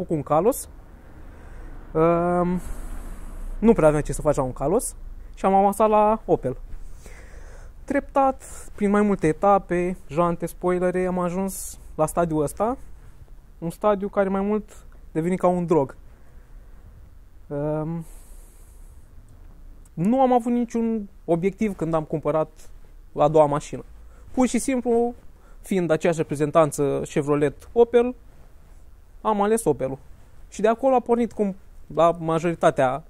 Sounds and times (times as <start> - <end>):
Speech: 0.0 - 0.7, 2.0 - 2.7, 3.6 - 6.6, 7.9 - 12.8, 13.6 - 16.0, 17.5 - 18.1, 19.9 - 28.2, 29.2 - 33.1.